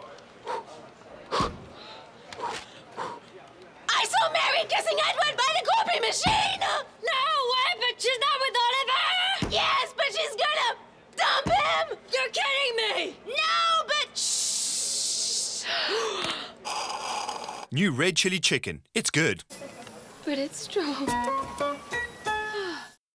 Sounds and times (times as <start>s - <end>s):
Speech: 17.7s - 19.5s
Music: 21.1s - 22.9s.